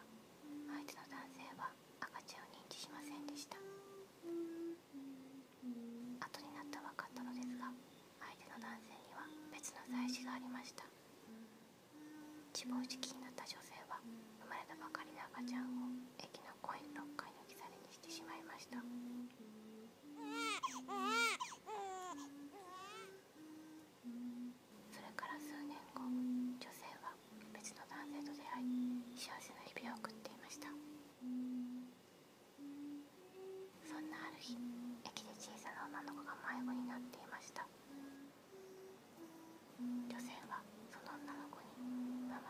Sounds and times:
Whispering: 0:00.0 - 0:21.0, 0:22.1 - 0:31.9, 0:32.6 - 0:38.4, 0:39.2 - 0:42.4.

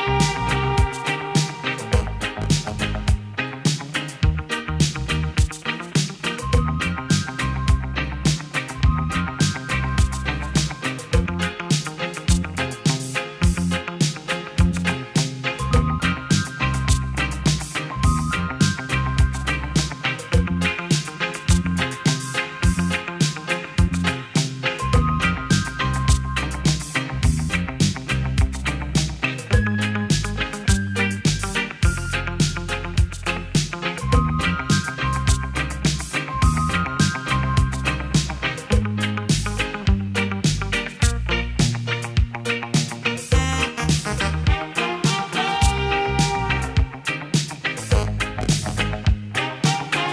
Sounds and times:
Music: 0:00.0 - 0:50.1.

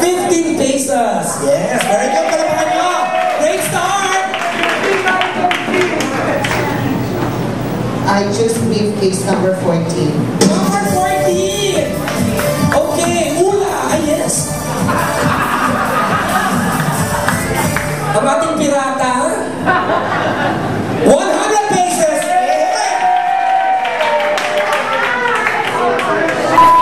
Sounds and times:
Inside, large room or hall: 0:00.0 - 0:26.8
Music: 0:10.4 - 0:18.2.

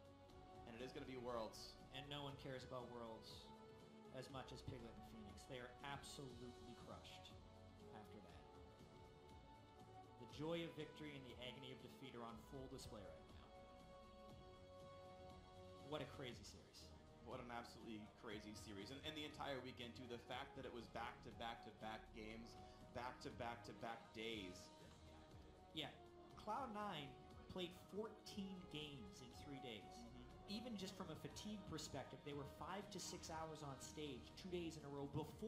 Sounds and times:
Speech: 0:00.7 - 0:03.5, 0:04.1 - 0:08.4, 0:10.2 - 0:13.5, 0:15.9 - 0:24.8, 0:25.8 - 0:35.4.

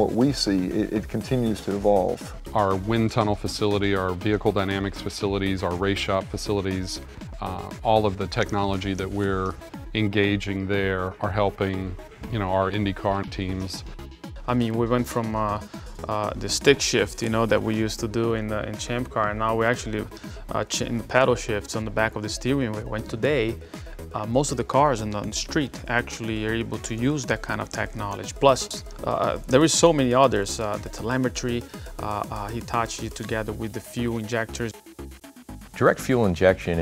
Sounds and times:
Speech: 0:00.0 - 0:13.9, 0:14.5 - 0:34.8, 0:35.8 - 0:36.8
Music: 0:00.0 - 0:36.8.

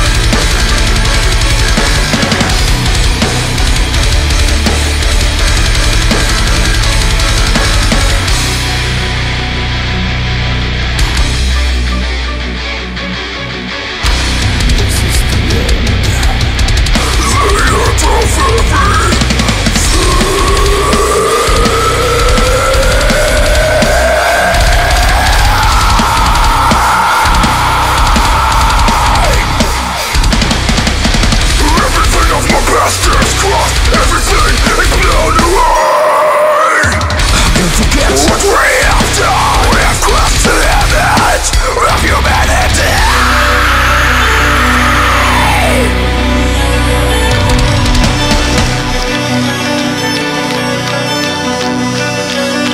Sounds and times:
Pop music: 0:14.2 - 0:52.7.

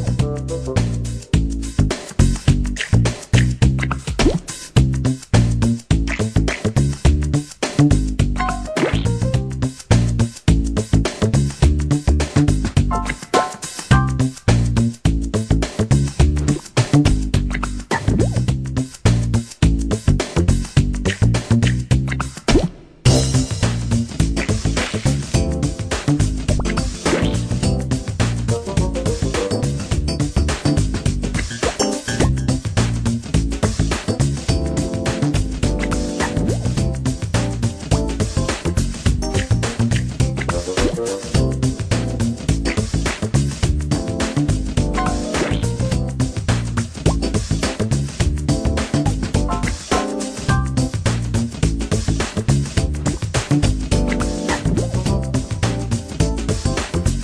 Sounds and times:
Video game music: 0:08.3 - 0:09.5, 0:12.8 - 0:14.3, 0:23.1 - 0:32.8, 0:34.0 - 0:43.0, 0:43.8 - 0:46.4, 0:48.5 - 0:51.0, 0:53.9 - 0:56.8.

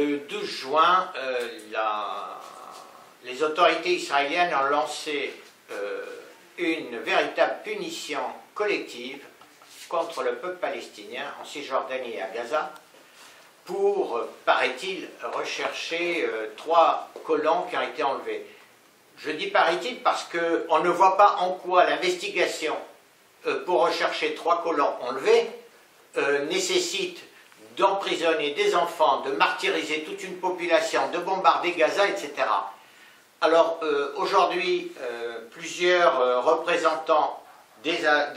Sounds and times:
Speech: 0:00.0 - 0:12.8, 0:13.6 - 0:18.6, 0:19.2 - 0:32.8, 0:33.4 - 0:38.3.

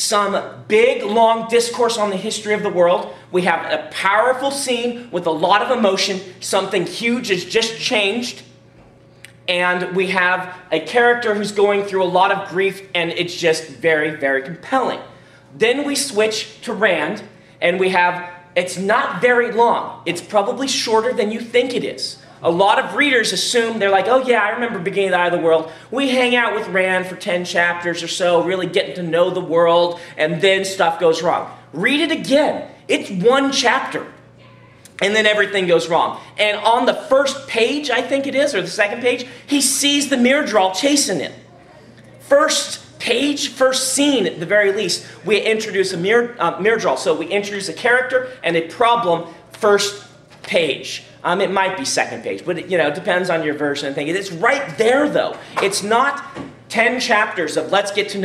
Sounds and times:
Speech: 0:00.0 - 0:08.5, 0:09.5 - 0:58.2.

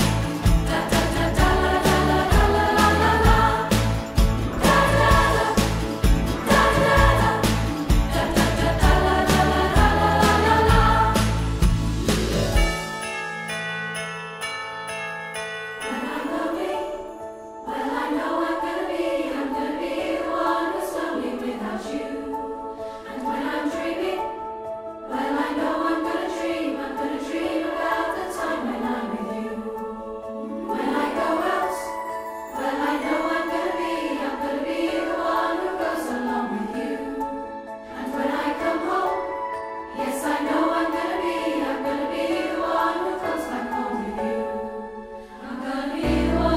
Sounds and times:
Jingle bell: 0:00.0 - 0:18.6, 0:29.6 - 0:44.5.

